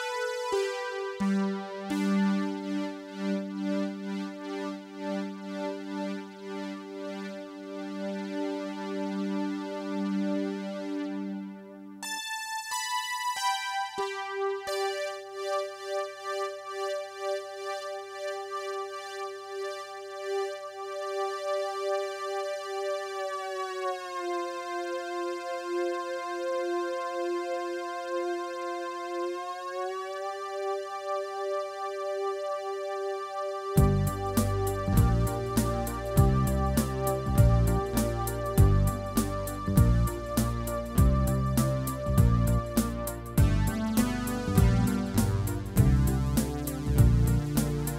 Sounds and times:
Music: 0.0 - 47.9.

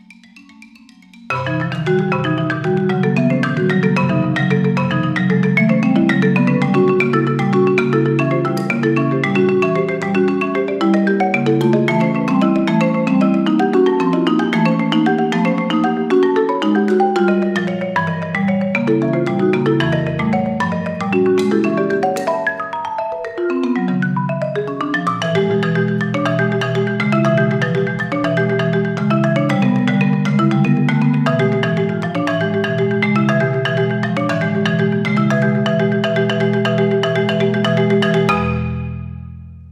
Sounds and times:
Glockenspiel: 0.0 - 39.2
Marimba, xylophone: 0.0 - 39.2.

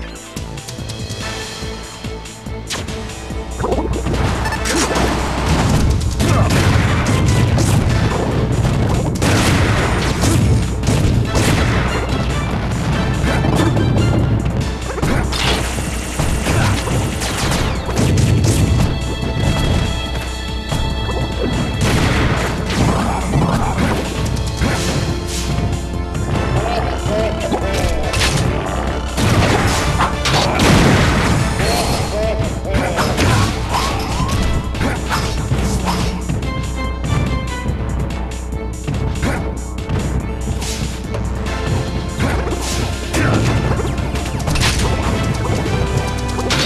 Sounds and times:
Music: 0.0 - 46.6.

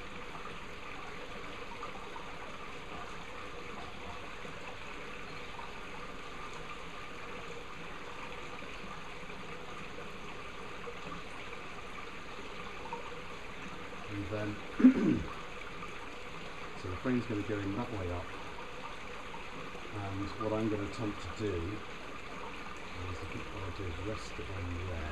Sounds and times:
Bee, wasp, etc.: 0.0 - 25.1
Speech: 14.1 - 15.2, 16.8 - 18.3, 19.9 - 21.8, 23.0 - 25.1.

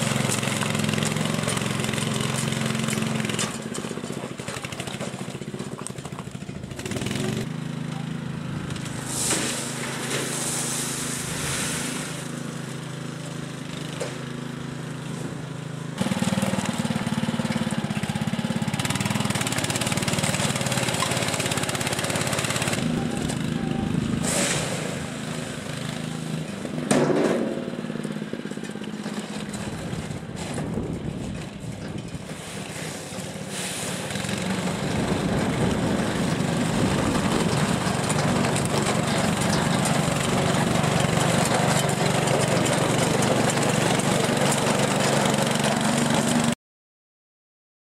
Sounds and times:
Vehicle: 0.0 - 46.6.

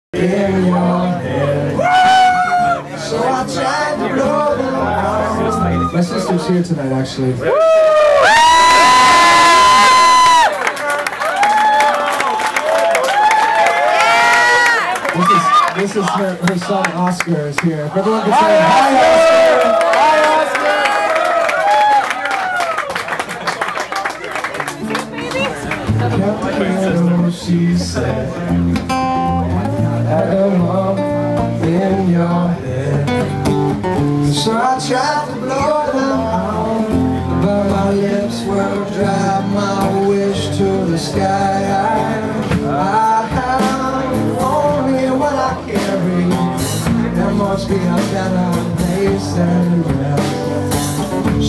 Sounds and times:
Crowd: 0.1 - 51.4.

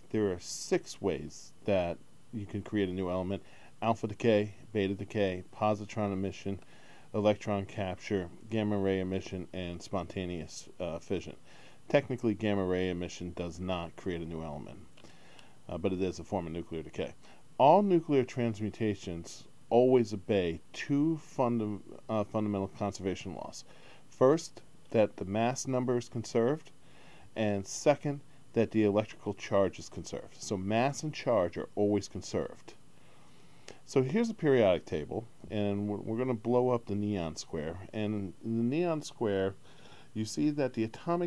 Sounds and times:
Speech: 0.0 - 14.9, 15.7 - 32.8, 33.7 - 39.6, 40.2 - 41.2.

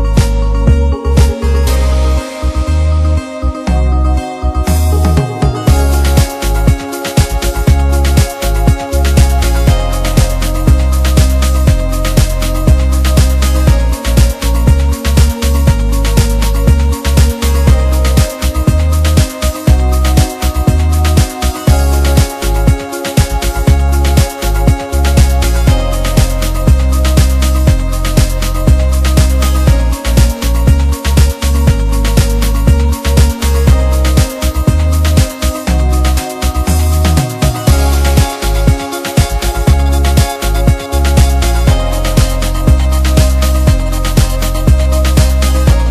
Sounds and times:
Music: 0.0 - 45.9.

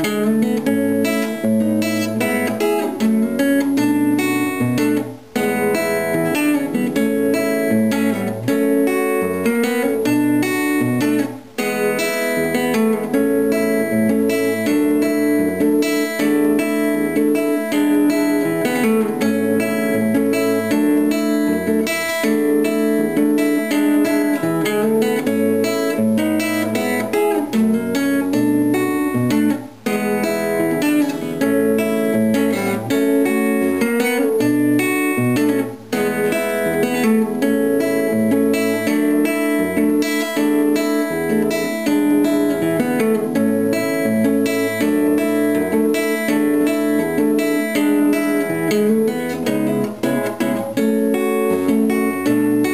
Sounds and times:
Acoustic guitar: 0.0 - 52.7.

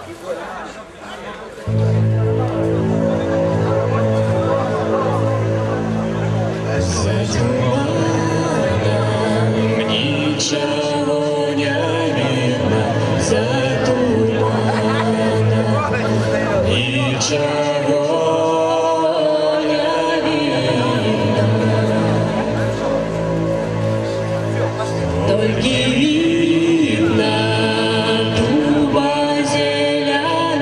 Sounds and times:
Music: 1.6 - 30.6.

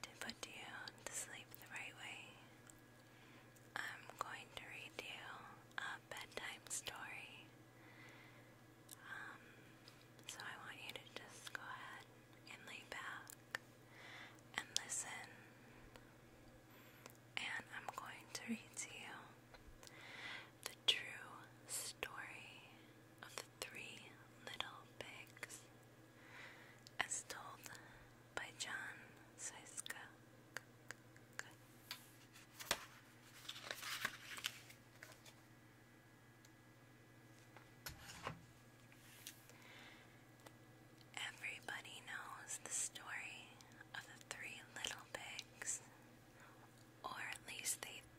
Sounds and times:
Whispering: 0.0 - 2.6, 3.7 - 7.5, 8.9 - 9.5, 10.2 - 13.5, 14.5 - 15.5, 17.4 - 19.4, 20.6 - 25.7, 26.9 - 30.2, 31.3 - 31.6, 41.1 - 48.1.

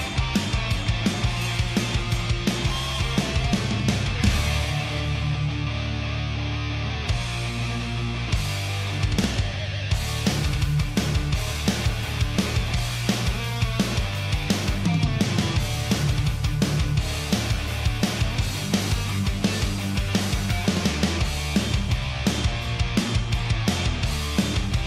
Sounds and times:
Music: 0.0 - 24.8.

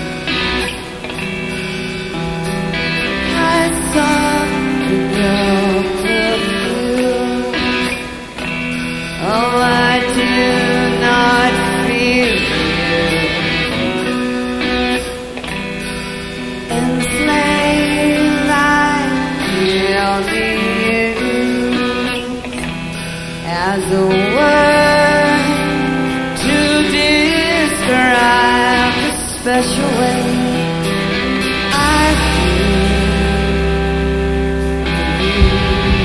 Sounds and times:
Music: 0.0 - 36.0.

